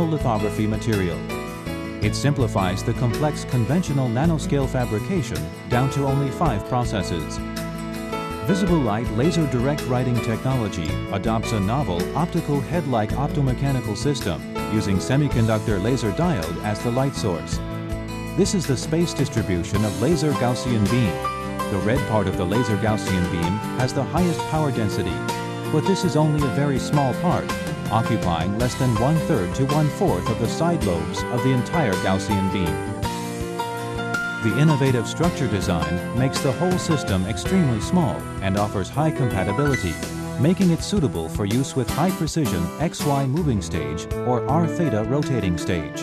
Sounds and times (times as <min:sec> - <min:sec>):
Speech: 0:00.0 - 0:01.2, 0:02.0 - 0:07.4, 0:08.5 - 0:17.6, 0:18.4 - 0:33.0, 0:34.4 - 0:46.0
Music: 0:00.0 - 0:46.0.